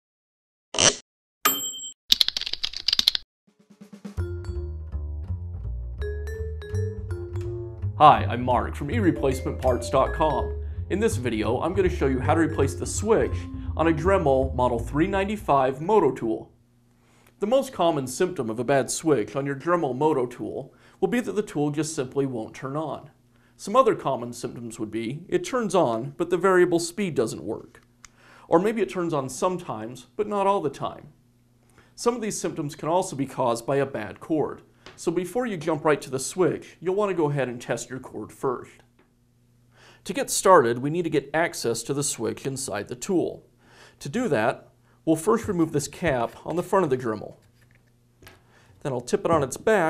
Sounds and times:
Speech: 8.0s - 16.5s, 17.4s - 27.8s, 28.5s - 31.2s, 32.0s - 38.9s, 40.0s - 47.4s, 48.8s - 49.8s.

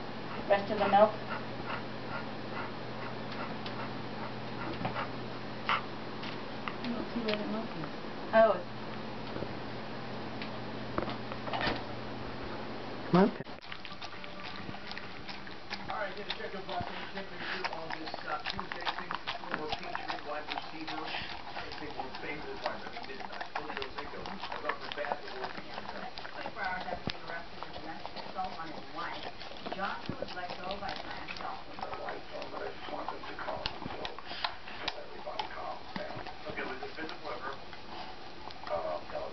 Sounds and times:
Dog: 0.3s - 5.1s, 5.7s - 5.9s, 13.6s - 39.3s
Speech: 15.9s - 37.6s.

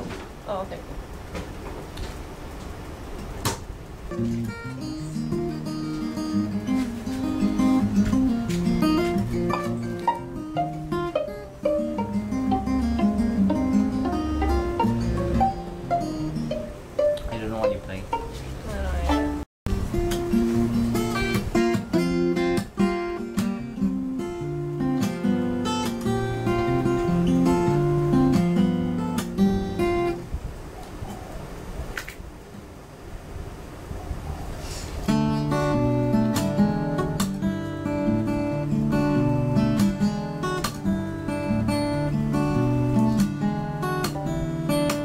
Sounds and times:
Acoustic guitar: 3.1s - 30.3s, 34.6s - 45.0s.

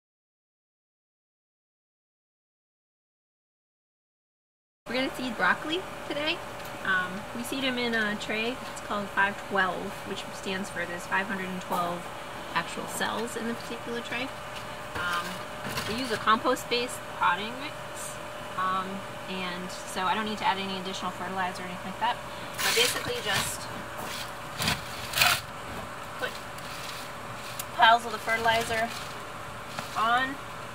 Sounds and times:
Speech: 4.9s - 14.4s, 15.0s - 23.8s, 27.8s - 29.0s, 30.0s - 30.4s.

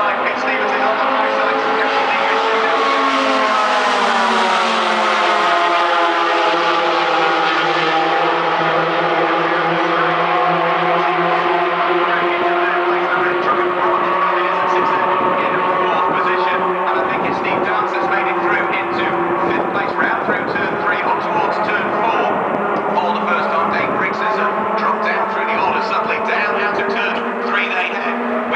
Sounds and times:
Speech: 0.0s - 3.1s, 9.1s - 28.5s
Car: 0.0s - 28.5s.

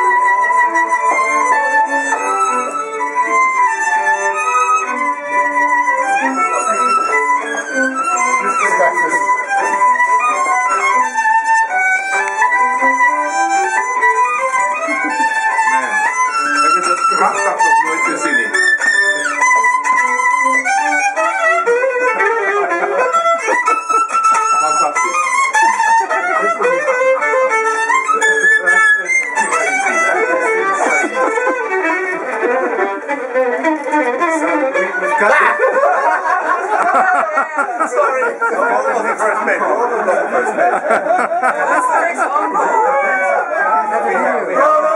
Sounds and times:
Pizzicato: 0.0s - 44.9s
Speech: 6.2s - 7.4s, 8.0s - 9.8s, 15.6s - 19.8s, 24.4s - 27.0s, 28.1s - 31.6s, 33.9s - 35.8s, 36.6s - 44.9s.

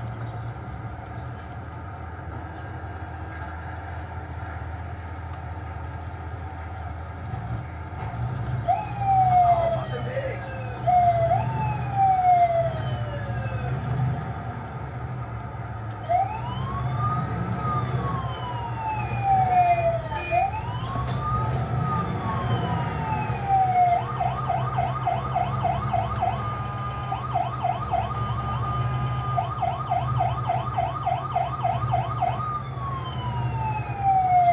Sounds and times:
Police car (siren): 8.6s - 14.7s, 15.9s - 34.5s.

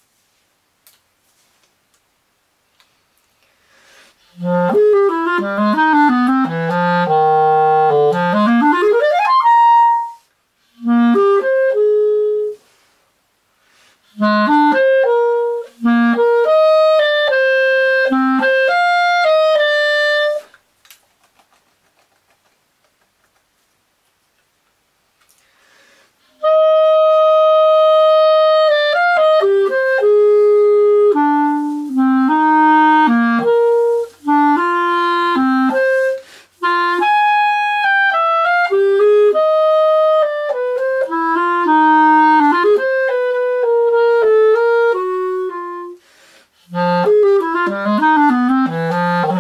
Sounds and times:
Clarinet: 3.9s - 13.0s, 14.0s - 20.6s, 26.2s - 49.4s.

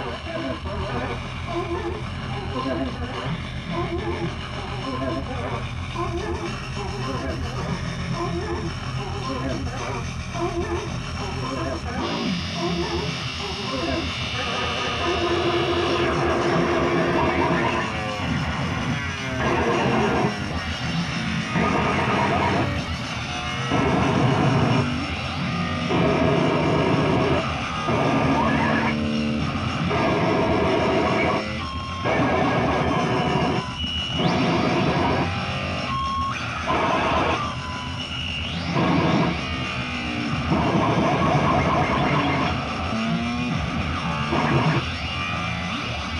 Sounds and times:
Inside, small room: 0.0s - 46.1s.

